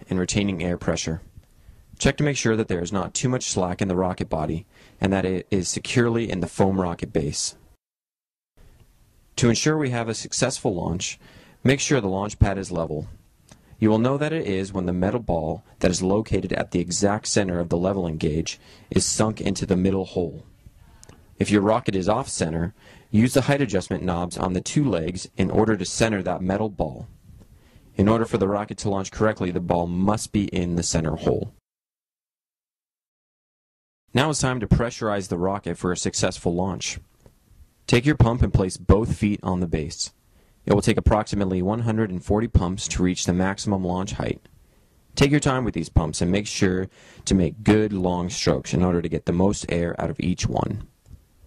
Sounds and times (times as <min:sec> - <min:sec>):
Speech: 0:00.0 - 0:01.3, 0:02.0 - 0:07.6, 0:09.4 - 0:13.2, 0:13.8 - 0:27.1, 0:28.0 - 0:31.6, 0:34.1 - 0:37.1, 0:37.9 - 0:44.5, 0:45.2 - 0:50.9.